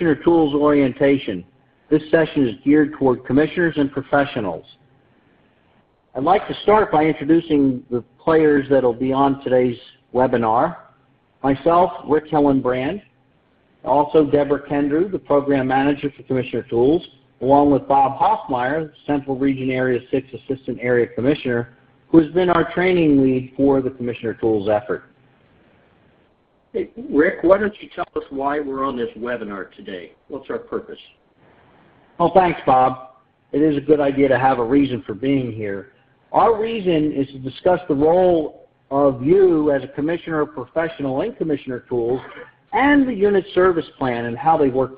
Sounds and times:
Speech: 0.0s - 4.8s, 6.2s - 13.1s, 13.8s - 25.1s, 26.8s - 31.2s, 32.2s - 44.9s.

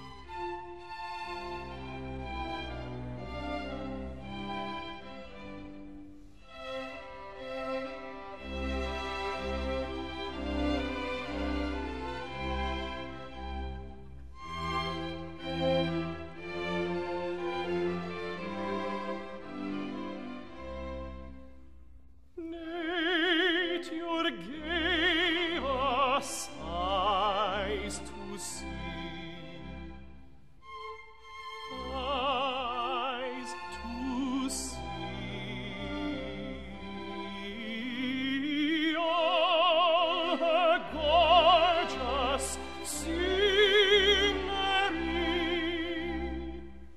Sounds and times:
Music: 0.0s - 46.9s.

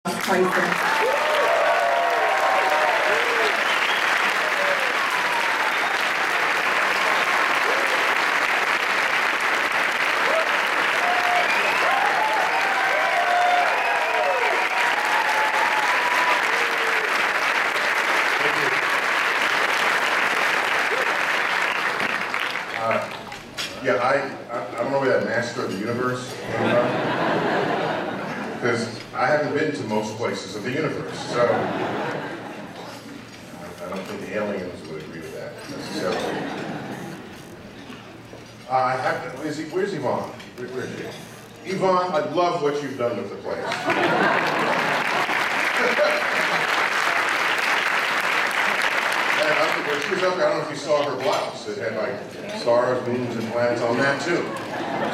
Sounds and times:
Applause: 0.0s - 23.5s, 43.7s - 50.7s.

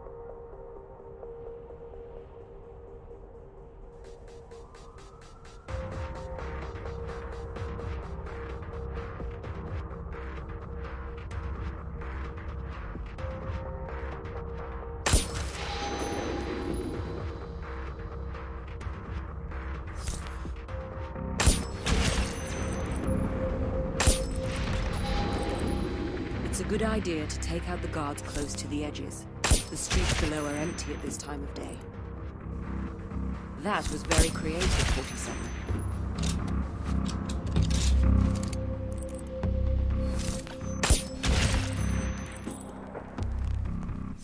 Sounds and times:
Music: 0.0s - 44.2s
Speech: 26.4s - 31.8s, 33.6s - 35.4s.

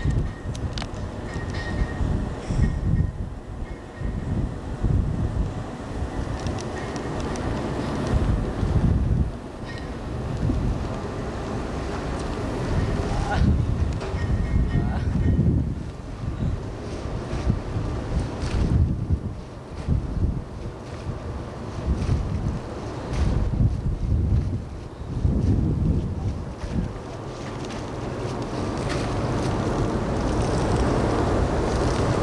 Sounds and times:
Ship: 0.0s - 32.2s.

